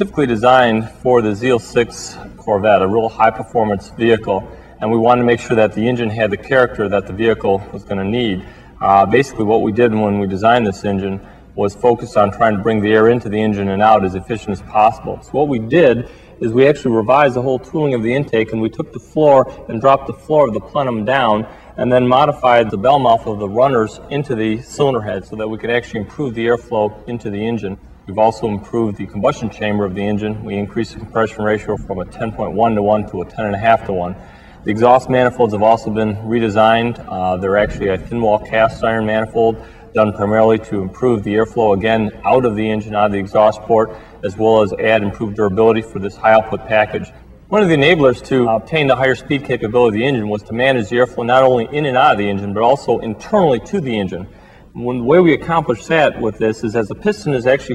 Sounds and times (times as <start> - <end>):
Speech: 0.0 - 57.7.